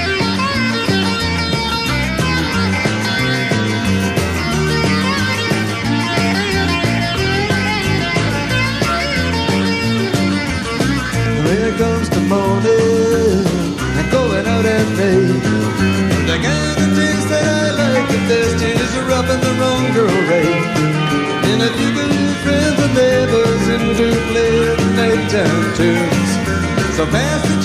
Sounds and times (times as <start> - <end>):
Ska: 0.0 - 27.6.